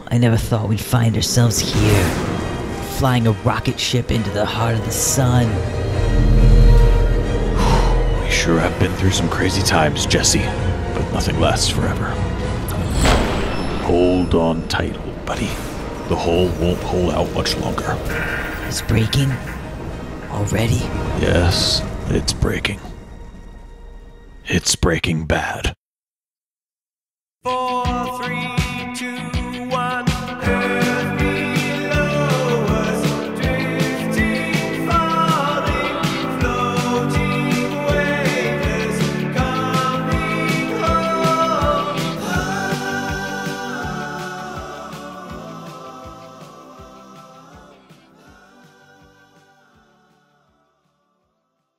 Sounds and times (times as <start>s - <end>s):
Speech: 0.0s - 2.2s, 2.9s - 5.6s, 8.2s - 12.2s, 13.8s - 19.5s, 20.3s - 22.9s, 24.4s - 25.8s
Music: 0.0s - 25.1s, 27.4s - 51.7s.